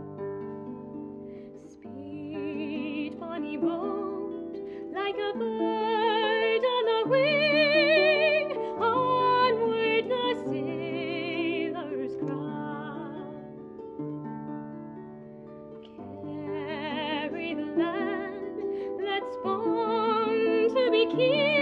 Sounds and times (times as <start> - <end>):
Harp: 0.0 - 21.6.